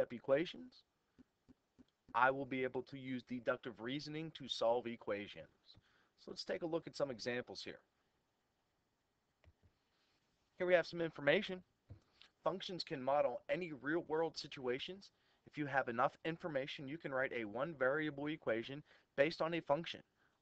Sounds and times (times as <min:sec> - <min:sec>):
Speech: 0:00.0 - 0:00.9, 0:02.1 - 0:07.9, 0:10.6 - 0:11.7, 0:12.4 - 0:20.1.